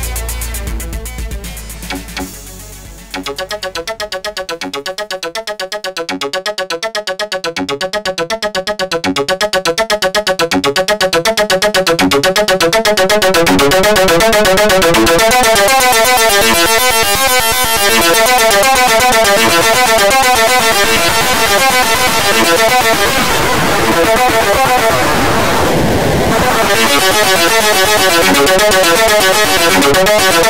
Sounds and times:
Music: 0:00.0 - 0:30.4
Sound effect: 0:01.8 - 0:30.4.

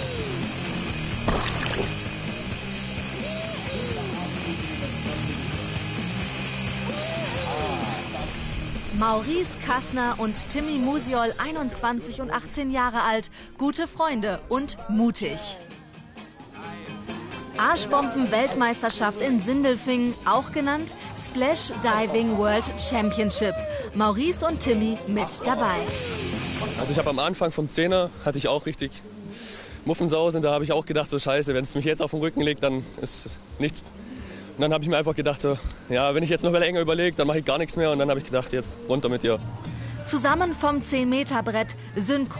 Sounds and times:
Music: 0:00.0 - 0:42.3.

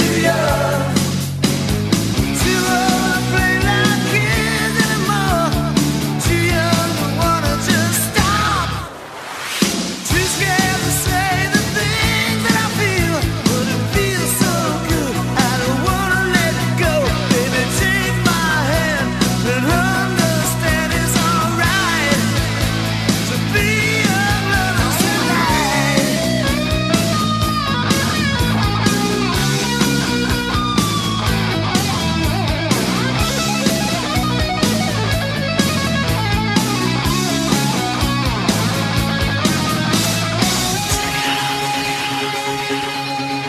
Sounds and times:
Heavy metal: 0:00.0 - 0:43.4.

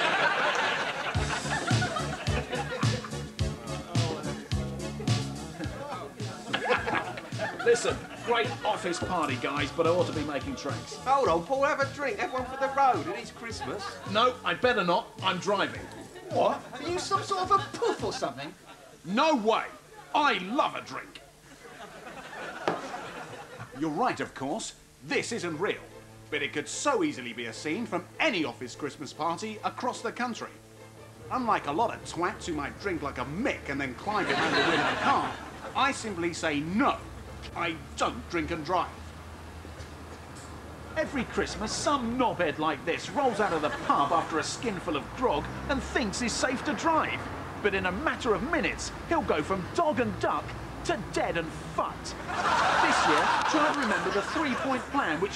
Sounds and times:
Music: 0:00.0 - 0:21.4, 0:23.5 - 0:40.0, 0:40.6 - 0:55.3
Speech: 0:07.6 - 0:21.3, 0:23.8 - 0:30.6, 0:31.3 - 0:39.0, 0:41.0 - 0:55.3.

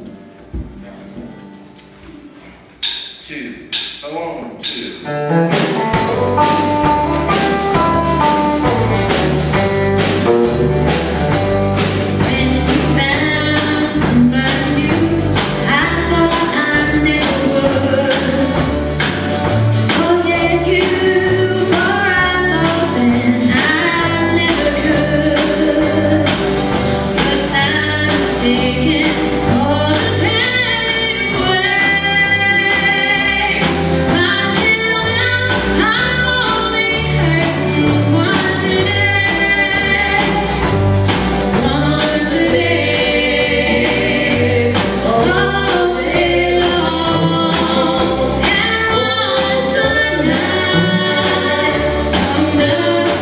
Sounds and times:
Music: 0:00.0 - 0:53.2
Female singing: 0:12.2 - 0:18.7, 0:19.9 - 0:26.4, 0:27.2 - 0:40.6, 0:41.6 - 0:53.2.

